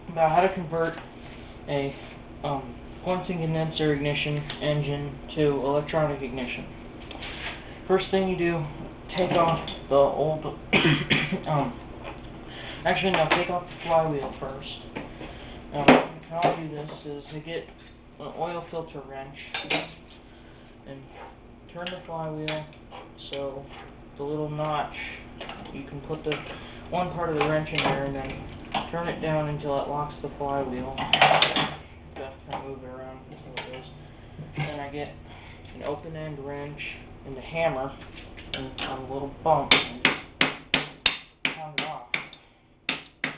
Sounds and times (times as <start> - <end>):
Speech: 0.1 - 1.0, 1.7 - 6.7, 7.9 - 10.6, 11.3 - 11.8, 12.8 - 14.9, 15.7 - 19.8, 20.8 - 31.1, 32.2 - 34.0, 34.6 - 35.2, 35.8 - 40.1, 41.5 - 42.2.